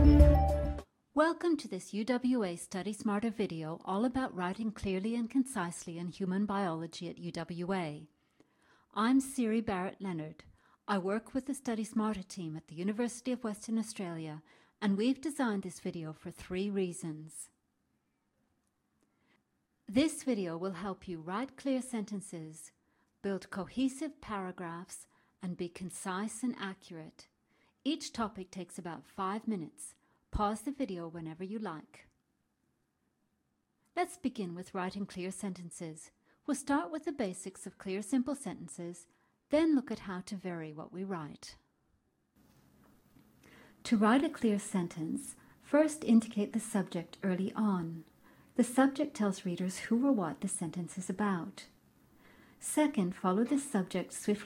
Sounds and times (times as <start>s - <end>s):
Speech: 1.2s - 8.1s, 9.0s - 17.6s, 19.9s - 27.3s, 27.9s - 32.1s, 34.0s - 41.6s, 43.8s - 51.8s, 52.6s - 54.4s.